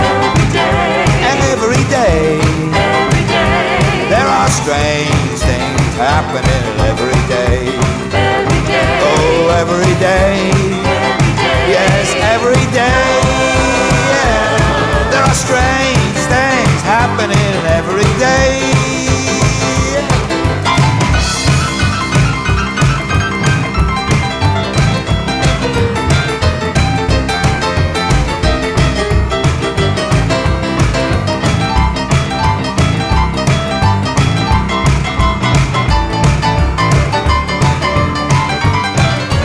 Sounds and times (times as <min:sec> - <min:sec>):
Singing: 0:00.0 - 0:20.2
Guitar: 0:00.0 - 0:39.4
Independent music: 0:00.0 - 0:39.4.